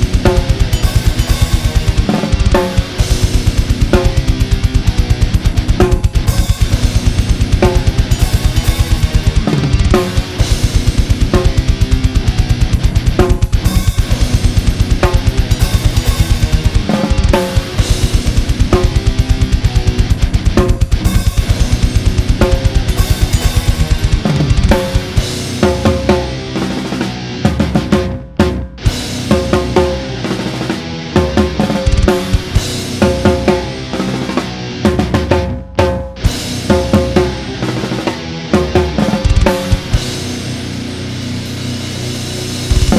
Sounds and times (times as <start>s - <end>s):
Music: 0.0s - 42.9s.